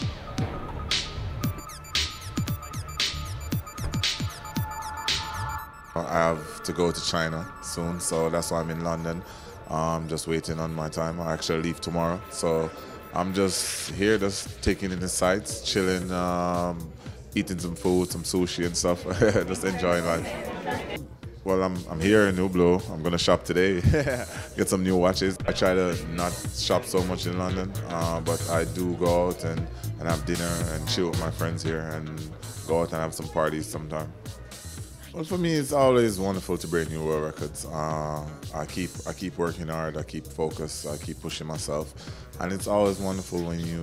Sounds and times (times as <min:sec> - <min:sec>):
Music: 0:00.0 - 0:43.8
Speech: 0:06.0 - 0:23.9, 0:24.5 - 0:34.2, 0:35.1 - 0:43.8.